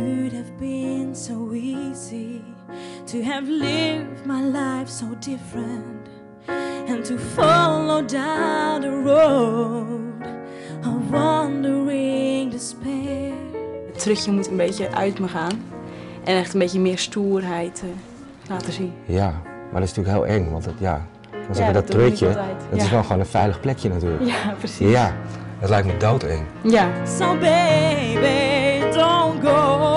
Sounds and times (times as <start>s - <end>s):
Music: 0.0s - 29.9s
Speech: 18.6s - 24.2s, 24.8s - 27.0s.